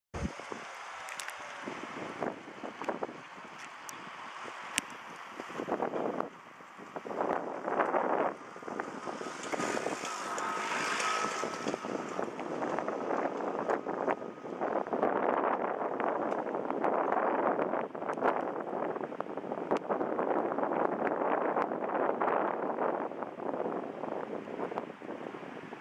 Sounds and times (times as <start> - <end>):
Wind: 0.1 - 25.8.